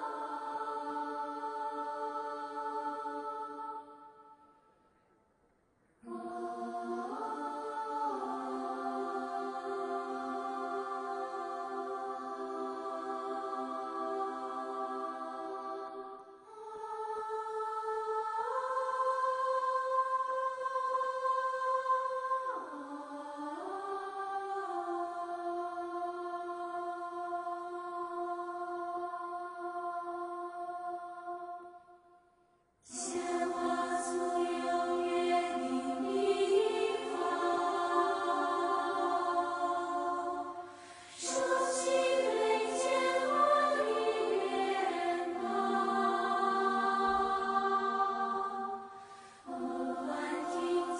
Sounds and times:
Choir: 0:00.0 - 0:50.9.

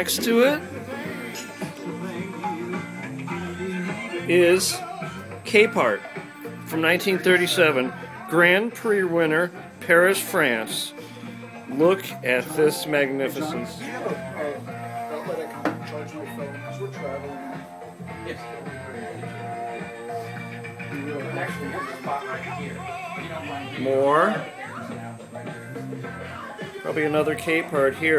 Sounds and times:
Music: 0:00.0 - 0:28.1.

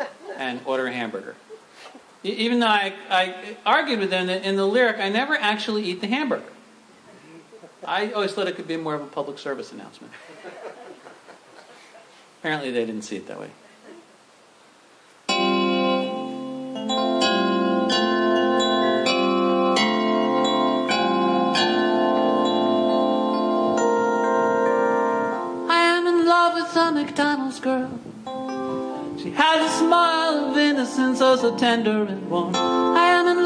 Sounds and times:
Speech: 0:07.9 - 0:10.2, 0:12.4 - 0:14.0
Music: 0:15.3 - 0:33.4.

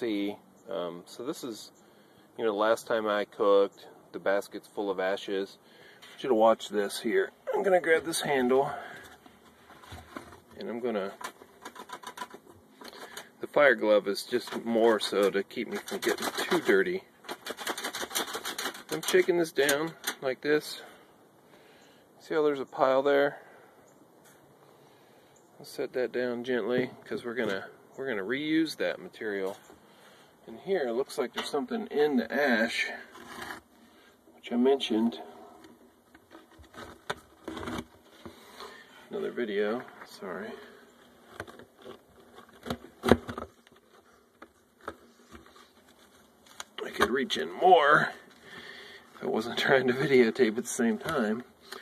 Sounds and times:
Speech: 0:00.0 - 0:01.7, 0:02.4 - 0:05.6, 0:06.2 - 0:09.0, 0:10.6 - 0:11.2, 0:13.4 - 0:17.1, 0:18.9 - 0:20.9, 0:22.2 - 0:23.5, 0:25.6 - 0:29.6, 0:30.5 - 0:33.1, 0:34.4 - 0:35.3, 0:39.1 - 0:40.8, 0:46.8 - 0:48.2, 0:49.2 - 0:51.5.

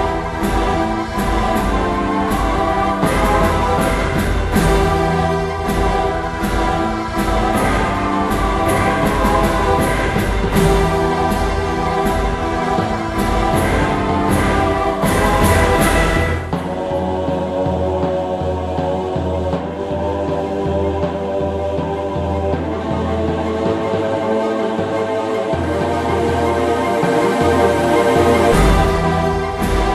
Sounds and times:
Music: 0:00.0 - 0:29.9.

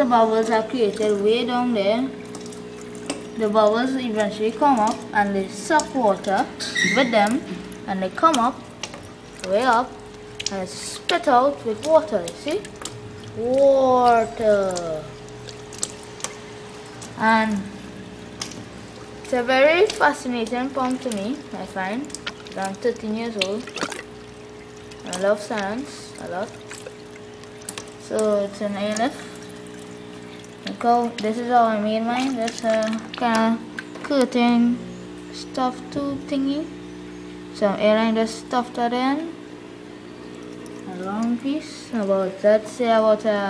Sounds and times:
Pump (liquid): 0:00.0 - 0:43.4
Water: 0:00.0 - 0:43.4.

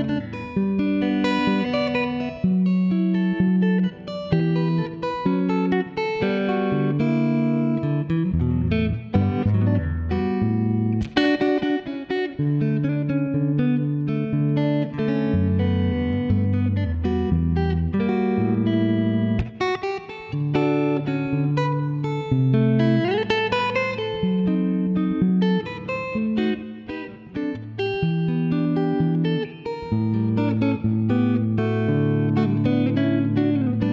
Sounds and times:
Electric guitar: 0:00.0 - 0:33.9.

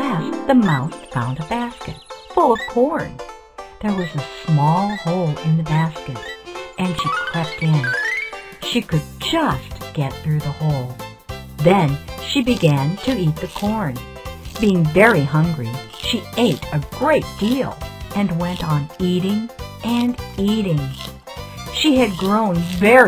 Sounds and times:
Speech: 0:00.0 - 0:03.2, 0:03.8 - 0:08.0, 0:08.6 - 0:11.0, 0:11.6 - 0:21.0, 0:21.8 - 0:23.0
Music: 0:00.0 - 0:23.0.

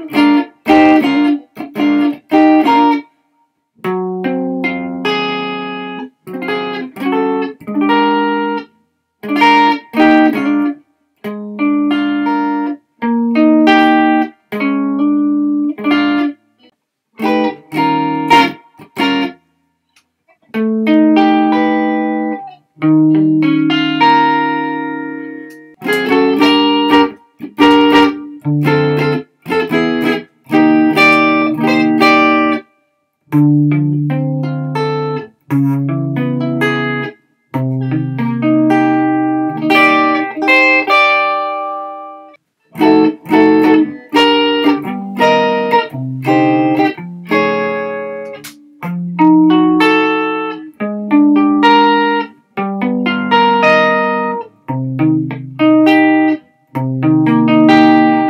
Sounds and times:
Blues: 0:00.0 - 0:03.2, 0:03.8 - 0:32.7, 0:33.3 - 0:58.3
Guitar: 0:00.0 - 0:58.3.

